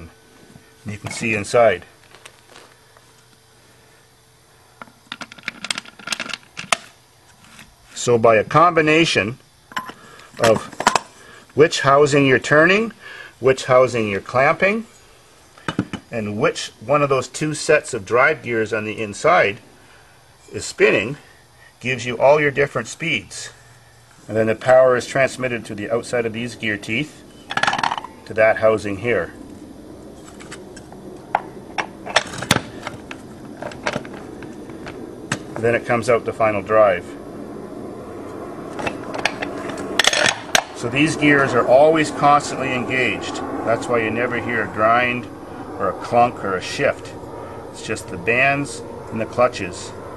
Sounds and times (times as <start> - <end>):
Speech: 0.8 - 1.9, 8.0 - 9.4, 10.4 - 10.8, 11.6 - 14.9, 16.1 - 19.6, 20.5 - 21.2, 21.8 - 23.6, 24.3 - 27.2, 28.3 - 29.4, 35.6 - 37.2, 40.8 - 47.2, 47.8 - 50.0.